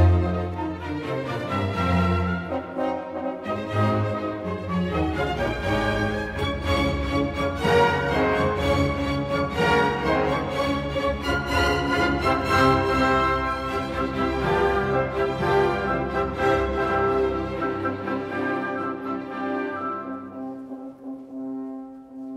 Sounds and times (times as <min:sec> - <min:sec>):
Music: 0:00.0 - 0:22.3.